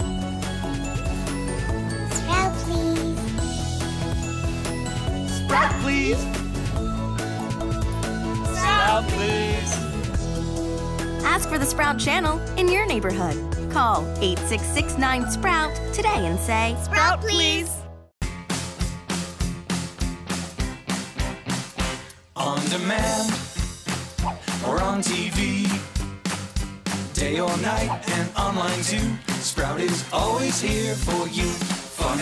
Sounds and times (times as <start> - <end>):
Music: 0.0 - 32.2.